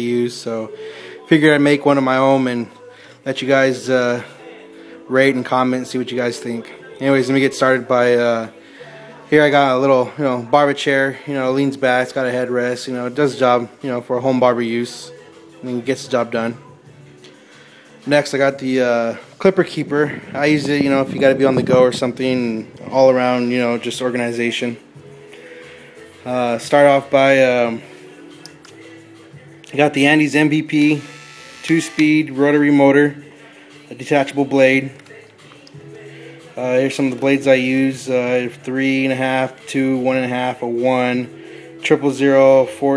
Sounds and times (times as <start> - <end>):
Speech: 0.0 - 4.5, 5.1 - 8.6, 9.2 - 16.6, 18.1 - 24.8, 26.2 - 27.9, 29.7 - 31.1, 31.7 - 33.2, 33.9 - 35.0, 36.6 - 42.9.